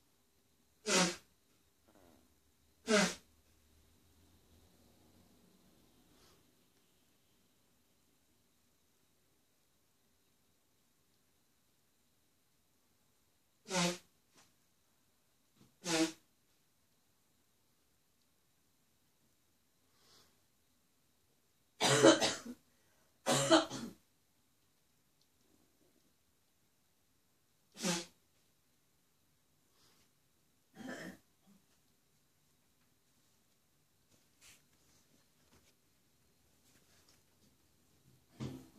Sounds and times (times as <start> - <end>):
Cough: 21.8 - 22.6, 23.2 - 24.0, 30.7 - 31.3.